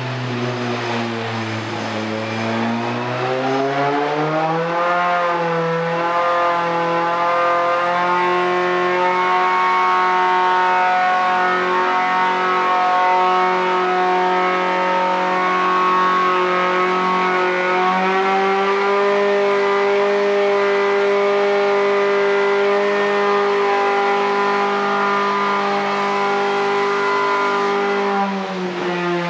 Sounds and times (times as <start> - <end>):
Race car, auto racing: 0.0 - 29.2.